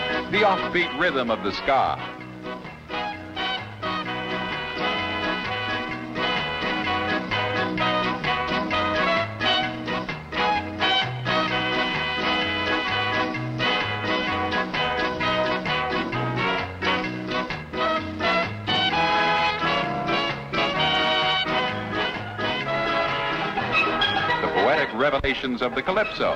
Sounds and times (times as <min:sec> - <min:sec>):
Funny music: 0:00.0 - 0:26.3.